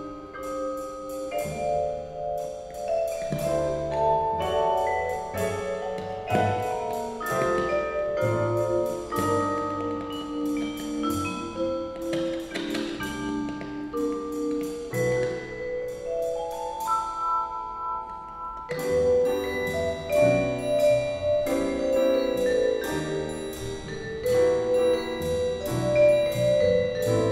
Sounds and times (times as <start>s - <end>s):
Classical music: 0.0s - 27.3s
Orchestra: 0.0s - 27.3s
Piano: 0.0s - 27.3s
Vibraphone: 0.0s - 27.3s.